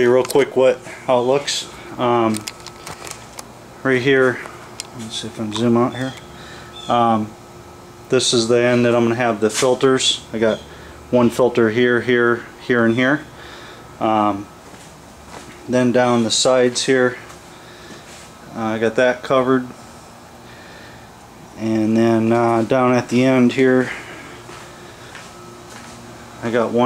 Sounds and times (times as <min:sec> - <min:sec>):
Speech: 0:00.0 - 0:02.4, 0:03.8 - 0:04.4, 0:05.0 - 0:06.2, 0:06.9 - 0:07.4, 0:08.1 - 0:13.3, 0:14.0 - 0:14.5, 0:15.7 - 0:17.3, 0:18.5 - 0:19.8, 0:21.6 - 0:24.0, 0:26.4 - 0:26.8.